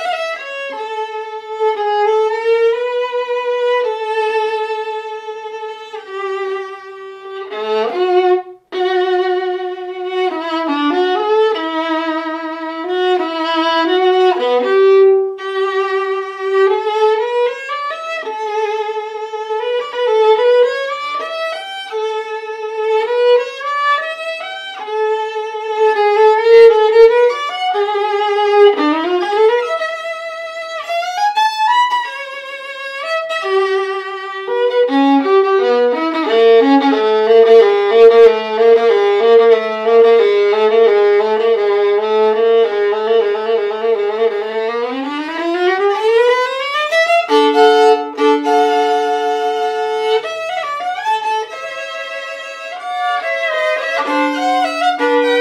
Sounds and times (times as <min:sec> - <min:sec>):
Violin, fiddle: 0:00.0 - 0:55.4.